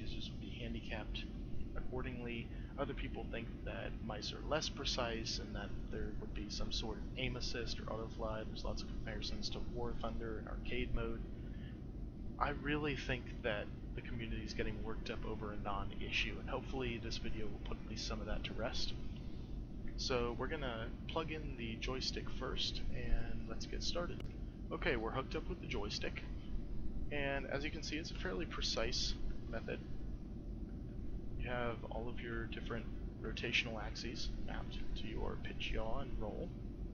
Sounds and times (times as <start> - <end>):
Speech: 0.0 - 11.2, 12.4 - 19.0, 20.0 - 26.3, 27.1 - 29.8, 31.4 - 36.6.